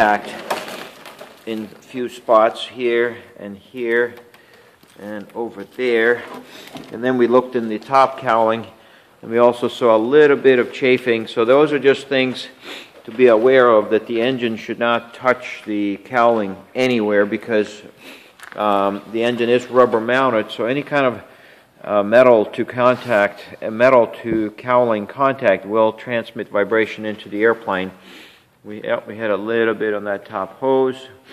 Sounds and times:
Speech: 0:00.0 - 0:00.5, 0:01.4 - 0:04.2, 0:05.0 - 0:17.9, 0:18.6 - 0:28.0, 0:28.6 - 0:31.2.

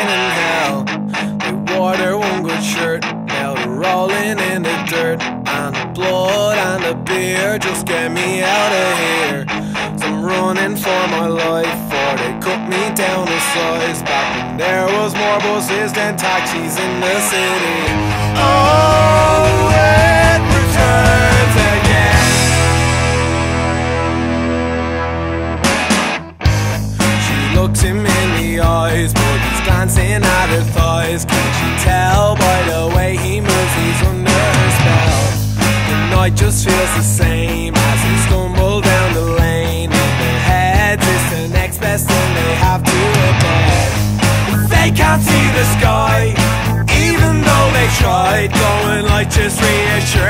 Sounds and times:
Music: 0:00.0 - 0:50.3.

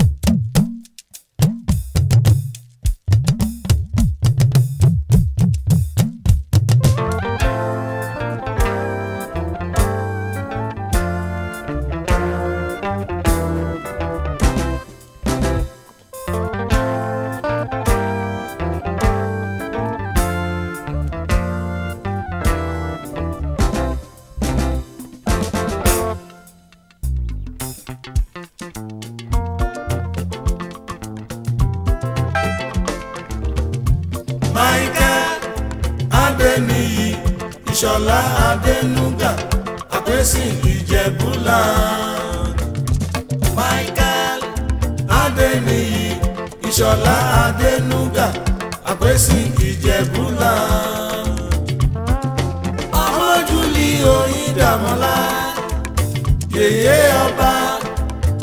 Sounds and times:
Music of Africa: 0:00.0 - 0:58.4.

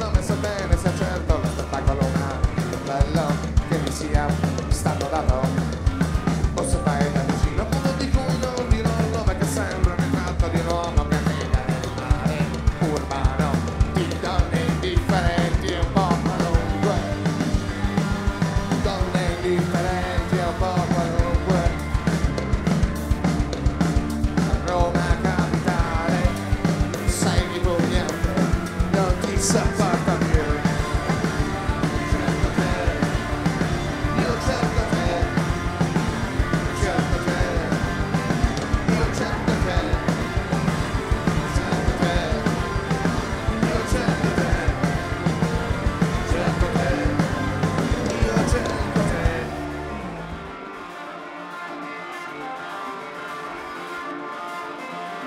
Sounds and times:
Music: 0:00.0 - 0:55.2.

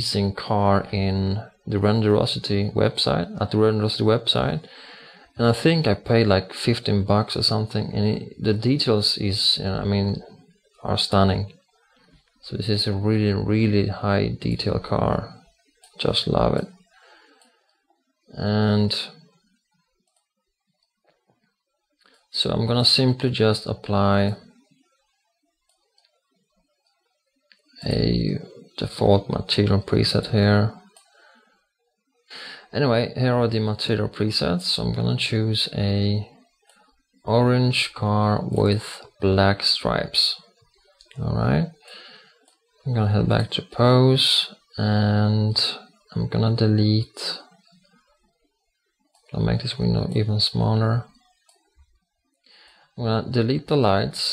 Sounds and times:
Speech: 0:00.0 - 0:11.6, 0:12.4 - 0:15.4, 0:16.0 - 0:16.7, 0:18.3 - 0:19.2, 0:22.3 - 0:24.4, 0:27.8 - 0:30.8, 0:32.4 - 0:36.3, 0:37.3 - 0:40.4, 0:41.1 - 0:42.0, 0:42.8 - 0:47.5, 0:49.3 - 0:51.1, 0:53.0 - 0:54.3.

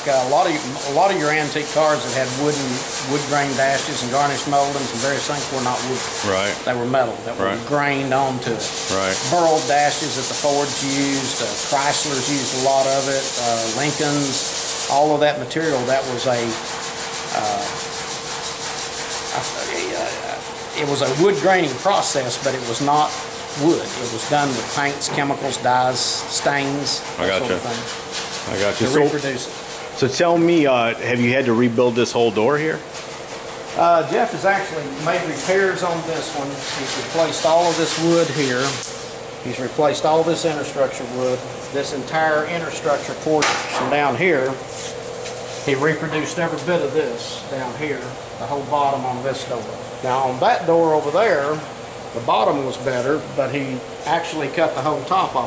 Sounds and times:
Rub: 0:00.0 - 0:51.6, 0:52.2 - 0:55.4.

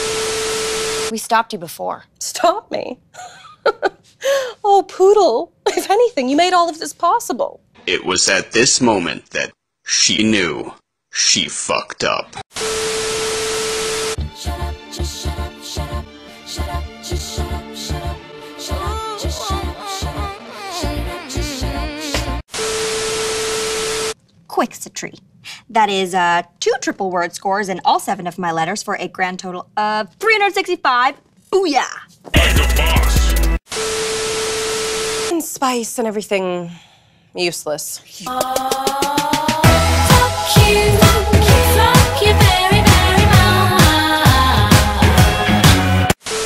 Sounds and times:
Speech: 0:04.6 - 0:12.4, 0:24.5 - 0:33.2, 0:35.3 - 0:36.8, 0:37.4 - 0:38.3
Music: 0:14.2 - 0:22.4, 0:32.4 - 0:33.6, 0:38.3 - 0:46.2.

